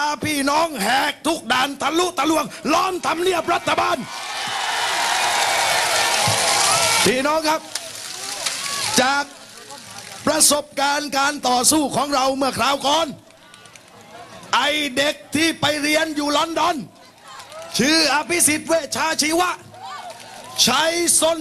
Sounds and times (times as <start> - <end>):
Speech: 0.0 - 4.1, 8.9 - 13.2, 14.1 - 16.9, 17.8 - 19.6, 20.6 - 21.4.